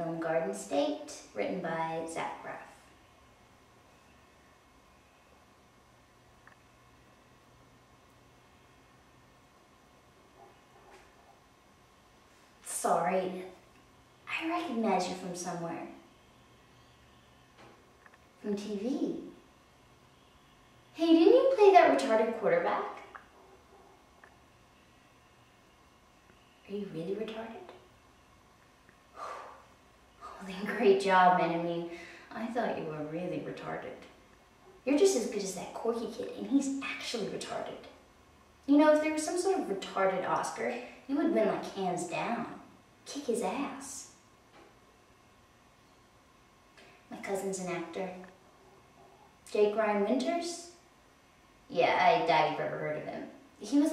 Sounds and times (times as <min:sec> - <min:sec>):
Narration, monologue: 0:00.0 - 0:03.0, 0:11.7 - 0:16.1, 0:17.7 - 0:19.8, 0:20.9 - 0:24.4, 0:26.6 - 0:44.8, 0:45.6 - 0:53.9.